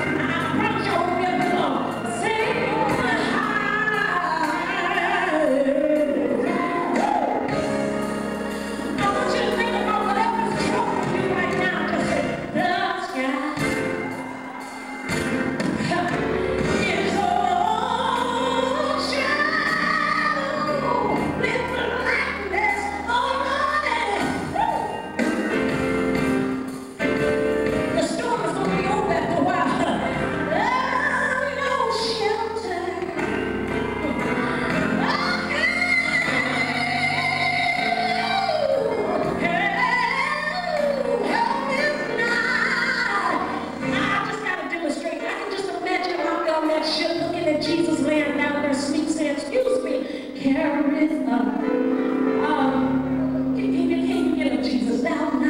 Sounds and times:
Music: 0.0s - 55.4s.

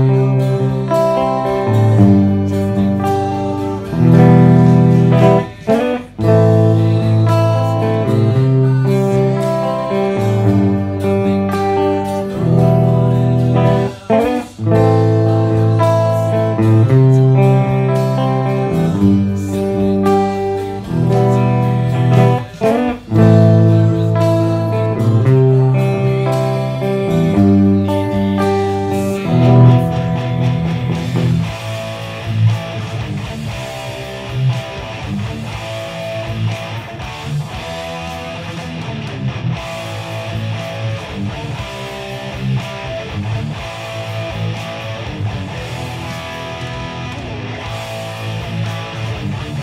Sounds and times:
Guitar: 0.0s - 49.6s
Heavy metal: 0.0s - 49.6s.

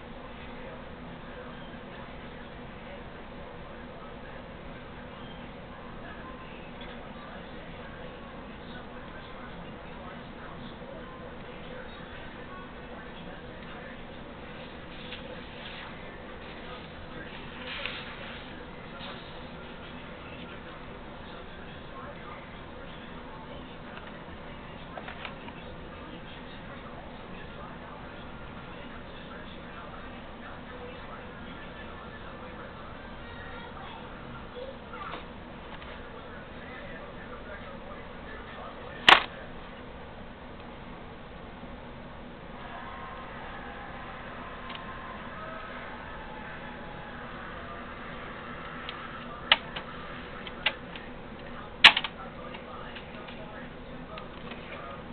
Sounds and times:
Speech: 0.0s - 39.9s, 42.6s - 55.1s.

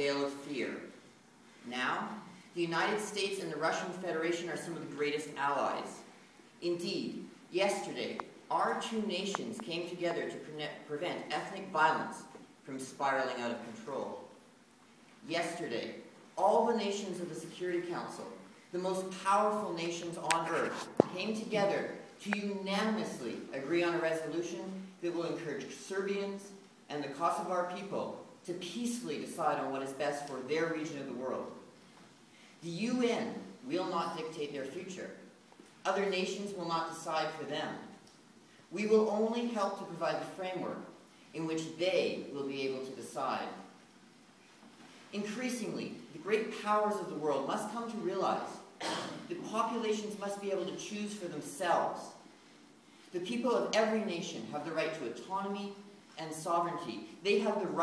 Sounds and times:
Male speech, man speaking: 0.0s - 0.9s, 1.7s - 6.0s, 6.6s - 14.3s, 15.2s - 31.6s, 32.6s - 35.2s, 35.8s - 38.0s, 38.8s - 43.6s, 45.1s - 52.2s, 53.2s - 57.8s
Narration, monologue: 0.0s - 57.8s.

